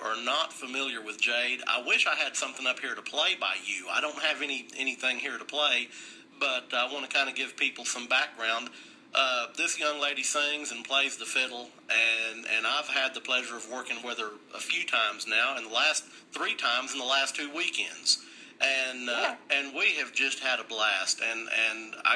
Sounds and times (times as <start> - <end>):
Radio: 0.0 - 22.1
Speech: 0.0 - 22.1.